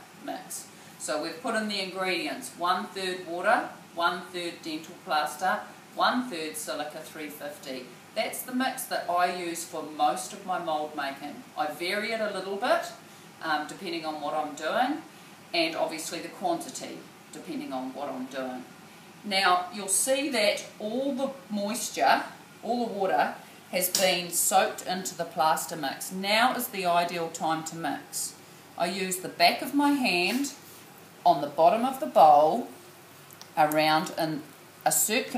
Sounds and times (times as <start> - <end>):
Speech: 0.2 - 18.7, 19.3 - 30.6, 31.3 - 32.7, 33.6 - 35.3.